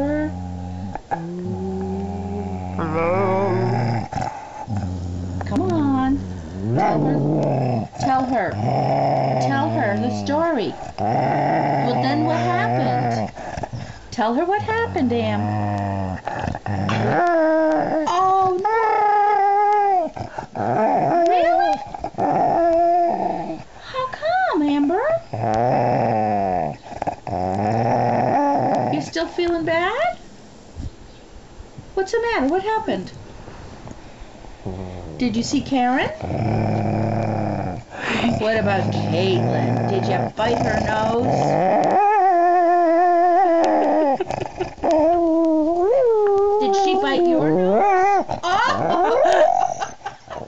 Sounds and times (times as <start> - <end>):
Speech: 5.4 - 6.2, 6.8 - 7.4, 8.0 - 8.6, 9.4 - 10.8, 11.8 - 13.3, 14.1 - 15.5, 21.3 - 21.8, 23.8 - 25.2, 28.9 - 30.2, 32.0 - 33.2, 34.7 - 36.2, 38.2 - 41.5, 46.6 - 47.8.